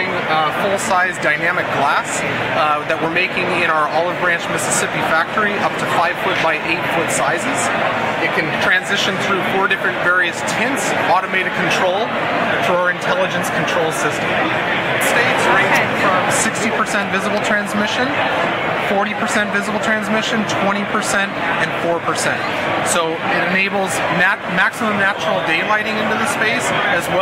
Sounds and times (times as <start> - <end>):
Speech: 0.0 - 27.2.